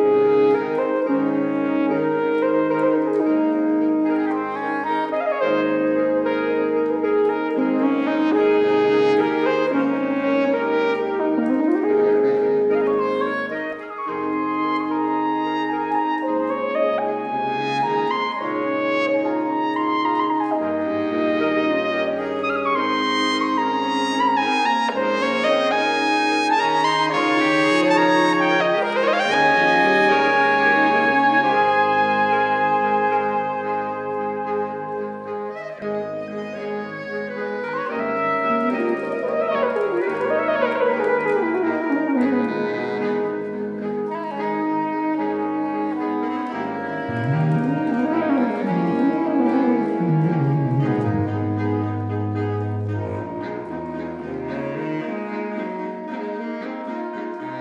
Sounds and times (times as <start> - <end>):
Music: 0.0 - 57.6.